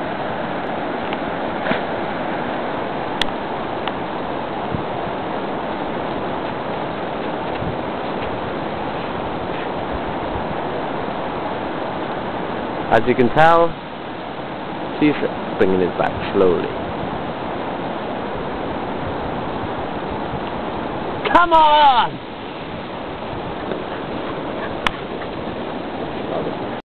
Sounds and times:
Speech: 12.9s - 13.8s, 15.0s - 16.8s, 21.3s - 22.2s.

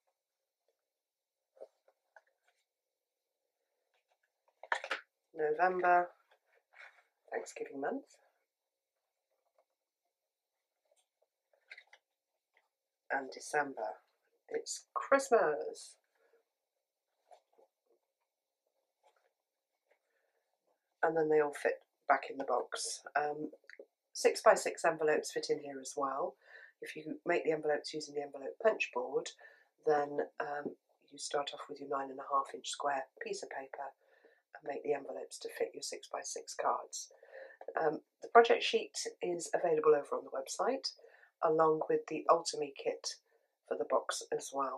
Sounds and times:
Inside, small room: 0.0s - 44.7s
Speech: 5.4s - 6.1s, 7.3s - 8.2s, 13.1s - 16.0s, 21.0s - 23.6s, 24.2s - 34.0s, 34.6s - 44.7s.

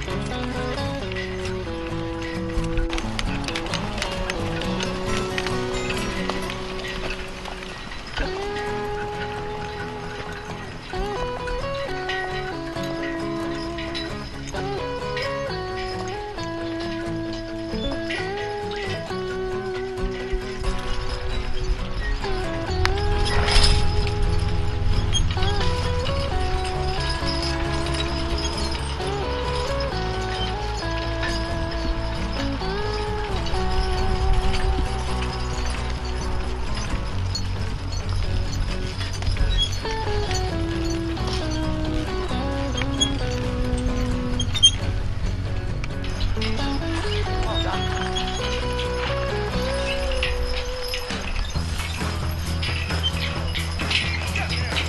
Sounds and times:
Music: 0.0s - 54.8s.

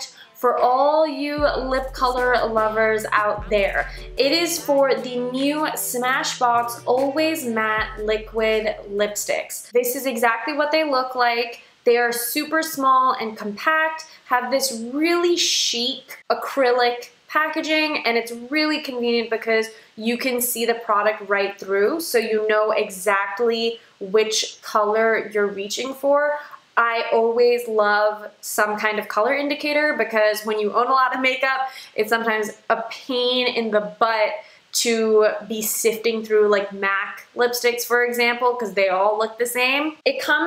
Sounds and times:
Speech: 0.0s - 40.4s.

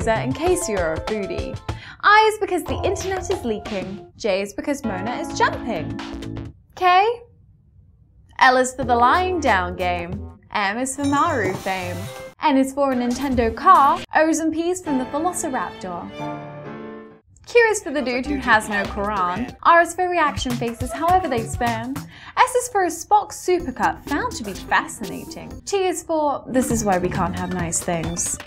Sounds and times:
Music: 0.0s - 4.2s, 4.8s - 6.6s, 8.8s - 25.7s, 26.5s - 28.4s
Speech: 0.0s - 6.0s, 6.8s - 7.3s, 8.4s - 16.1s, 17.5s - 28.4s.

